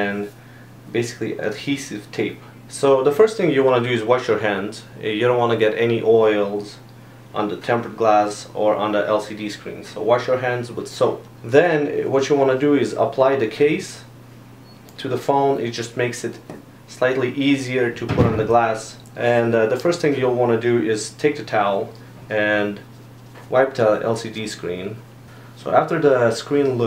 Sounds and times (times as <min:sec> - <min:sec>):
Speech: 0:00.0 - 0:14.2, 0:15.0 - 0:22.9, 0:23.5 - 0:25.0, 0:25.6 - 0:26.8.